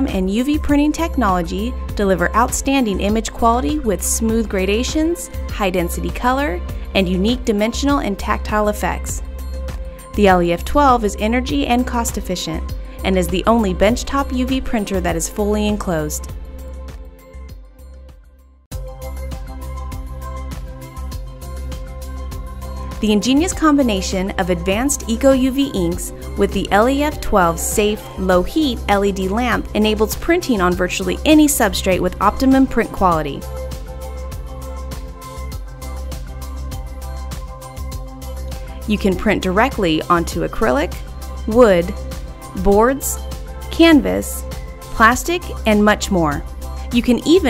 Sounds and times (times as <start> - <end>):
Speech: 0.0 - 9.2, 10.2 - 16.3, 23.0 - 33.4, 38.9 - 42.0, 42.6 - 43.2, 43.8 - 47.4
Music: 0.0 - 47.4.